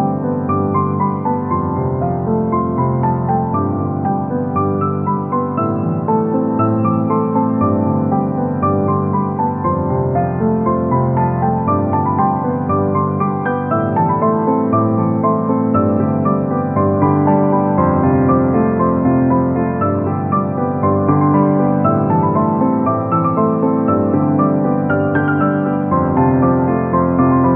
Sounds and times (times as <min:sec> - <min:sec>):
Music: 0:00.0 - 0:27.5.